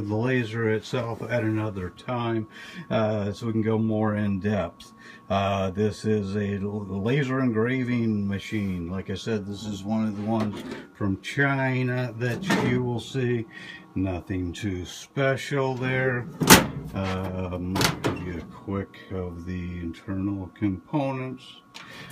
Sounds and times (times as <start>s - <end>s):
Speech: 0.0s - 21.7s.